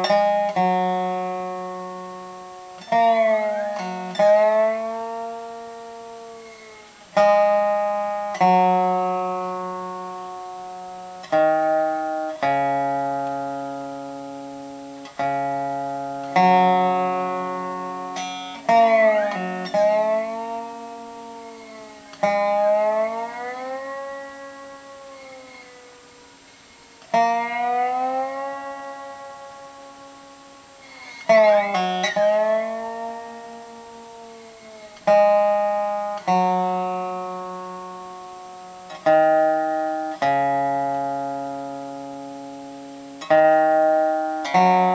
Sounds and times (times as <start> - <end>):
Guitar: 0.0 - 44.9.